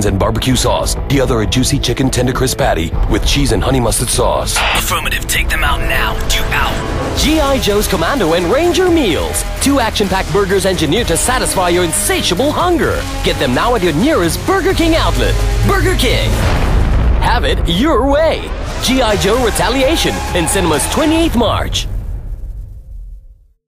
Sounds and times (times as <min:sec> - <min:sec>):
Speech: 0:00.0 - 0:16.5, 0:17.2 - 0:21.9
Music: 0:00.0 - 0:23.6.